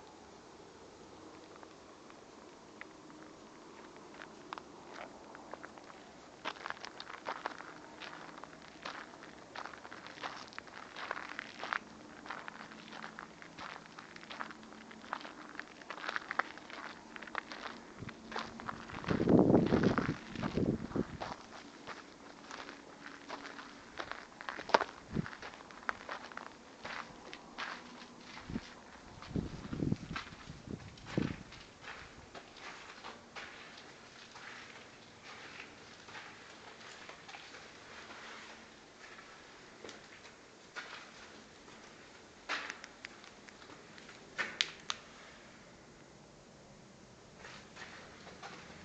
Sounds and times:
Crackle: 1.2s - 46.2s.

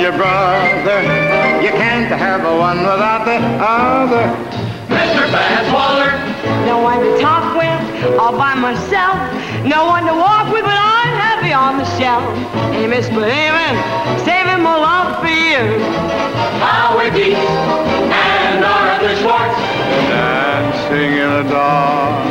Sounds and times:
Music: 0.0s - 22.3s.

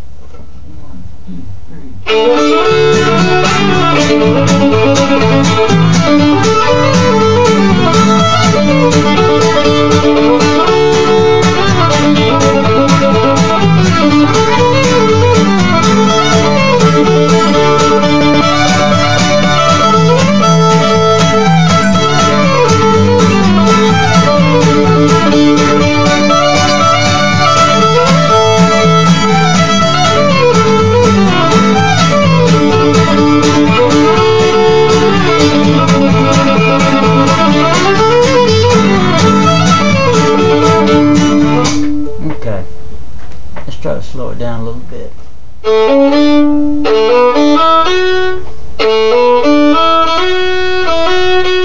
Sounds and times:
Violin, fiddle: 2.1s - 42.2s, 45.6s - 51.6s.

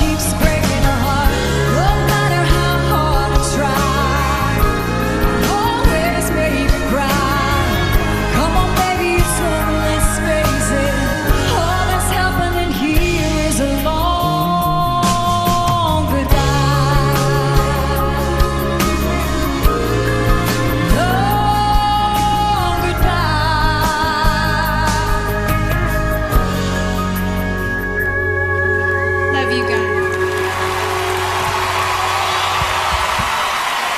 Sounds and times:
Inside, large room or hall: 0.0s - 33.9s
Music: 0.0s - 33.9s.

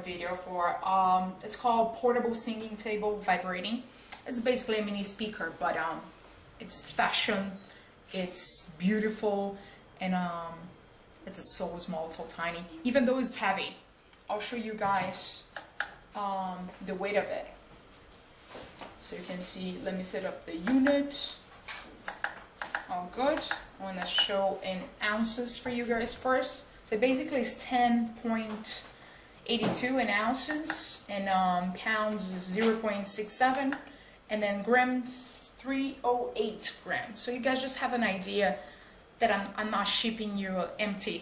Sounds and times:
Speech: 0.0s - 17.6s, 19.0s - 21.4s, 22.8s - 38.6s, 39.2s - 41.2s.

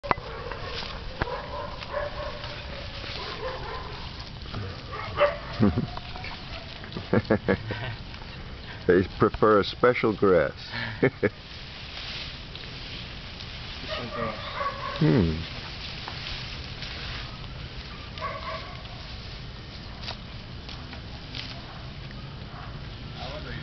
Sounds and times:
Goat: 0.0s - 9.4s, 13.8s - 23.6s
Domestic animals, pets: 0.1s - 6.9s, 13.9s - 15.1s.

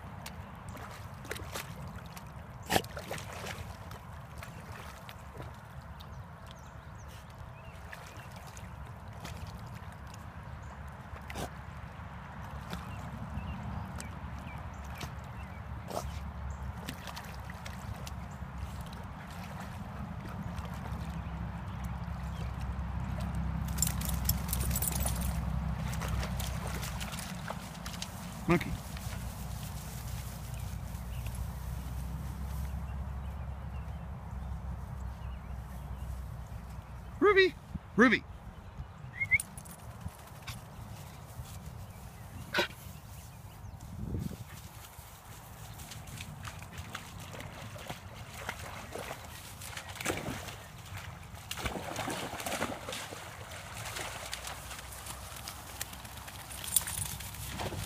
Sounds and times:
Speech: 28.5s - 28.8s, 37.2s - 38.3s.

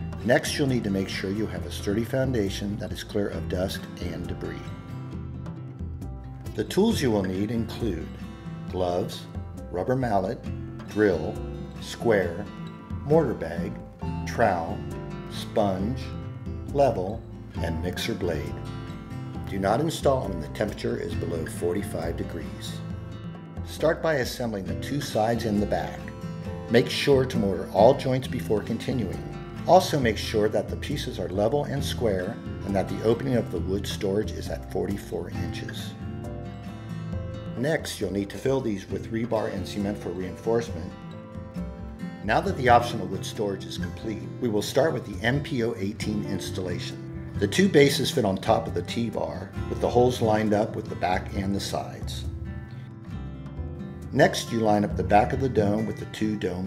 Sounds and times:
Music: 0.0s - 56.6s
Speech: 0.2s - 4.8s, 6.5s - 8.1s, 8.7s - 18.6s, 19.5s - 22.9s, 23.7s - 26.1s, 26.7s - 36.0s, 37.6s - 41.0s, 42.2s - 52.3s, 54.1s - 56.6s.

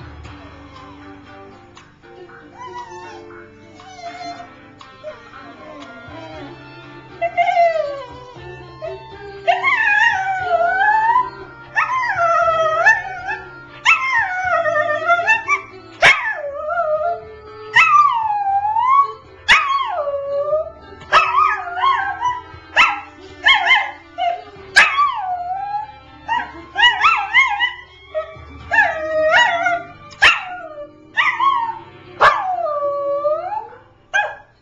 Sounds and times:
Music: 0.0s - 34.6s
Dog: 2.6s - 6.3s.

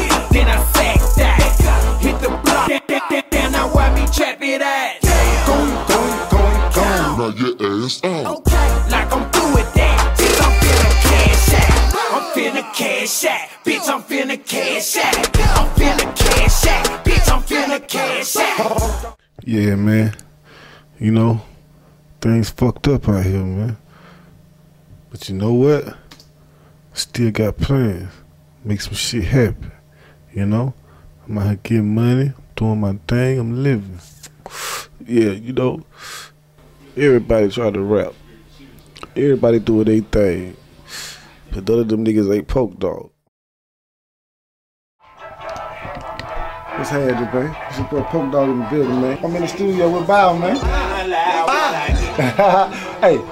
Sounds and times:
Music: 0.0s - 7.3s, 8.2s - 19.2s, 45.0s - 53.3s
Speech: 19.4s - 20.2s, 22.2s - 23.8s, 25.1s - 26.0s, 27.0s - 34.0s, 35.0s - 35.8s, 36.8s - 40.6s, 41.5s - 43.2s, 46.8s - 51.8s, 52.4s - 53.3s.

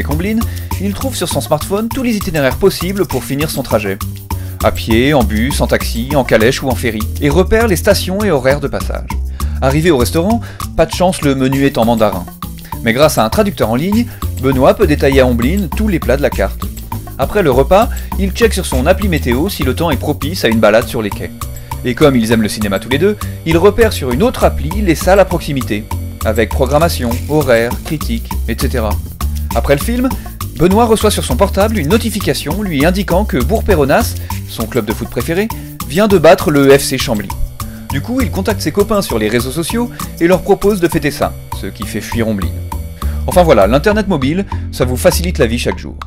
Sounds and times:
Speech: 0.0s - 4.0s, 4.6s - 16.6s, 17.2s - 42.6s, 43.3s - 46.0s
Music: 0.0s - 46.0s.

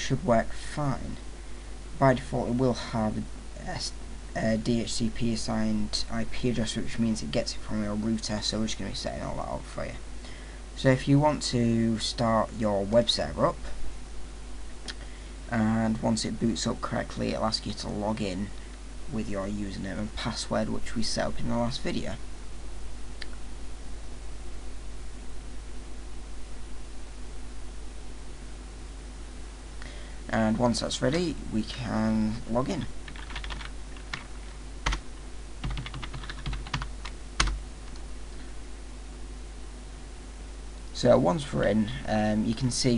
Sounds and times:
Speech: 0.0s - 1.2s, 2.0s - 10.0s, 10.8s - 13.8s, 15.5s - 22.2s, 30.3s - 33.0s, 40.9s - 42.9s.

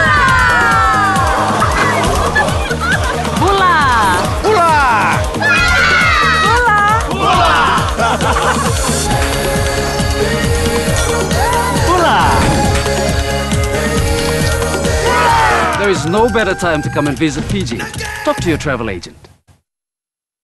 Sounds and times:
Music: 0.0s - 19.4s
Speech: 15.8s - 19.3s.

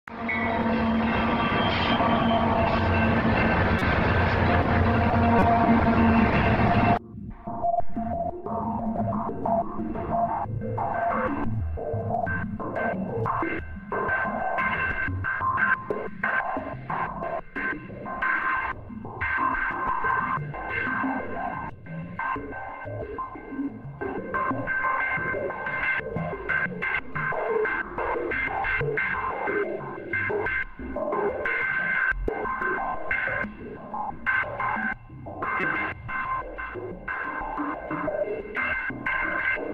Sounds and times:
Music: 0.0s - 39.7s
Railroad car, train wagon: 0.1s - 7.0s
Train: 0.1s - 7.0s.

